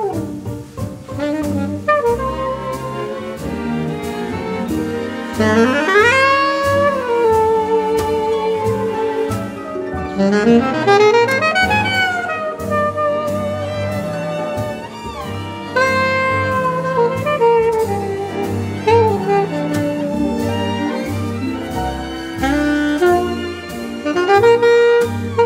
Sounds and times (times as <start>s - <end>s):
Jazz: 0.0s - 25.4s
Orchestra: 0.0s - 25.4s
Saxophone: 0.0s - 25.4s.